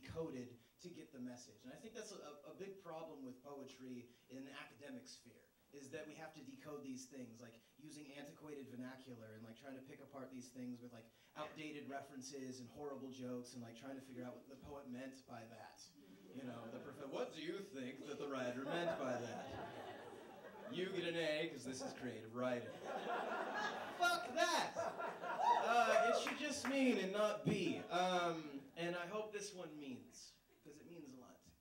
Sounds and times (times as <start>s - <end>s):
Speech: 0.0s - 19.8s, 20.6s - 22.8s, 24.0s - 24.9s, 25.6s - 31.6s.